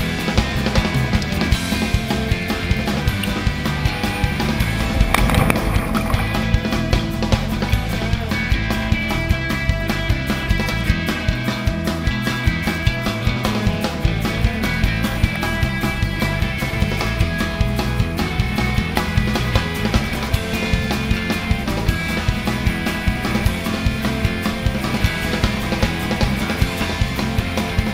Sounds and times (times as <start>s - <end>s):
Music: 0.0s - 27.9s.